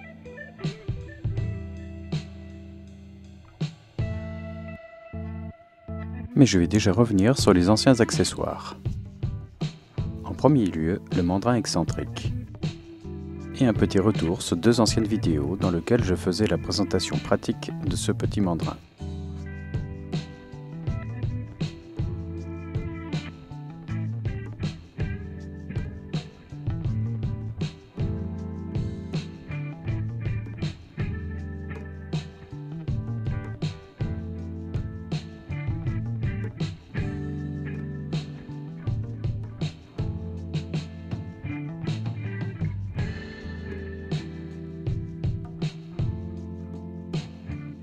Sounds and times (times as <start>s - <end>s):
Music: 0.0s - 47.8s
Speech: 6.4s - 8.8s, 10.2s - 12.4s, 13.5s - 18.9s.